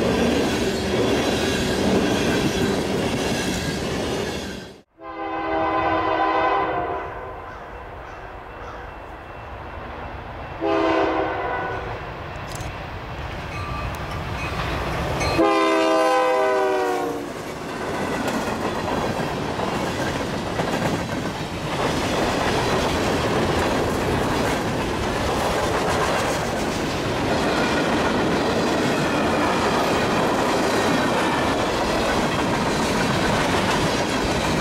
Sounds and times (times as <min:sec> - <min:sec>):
Railroad car, train wagon: 0:00.0 - 0:34.6
Train horn: 0:04.9 - 0:07.7, 0:10.6 - 0:12.0, 0:15.3 - 0:17.3.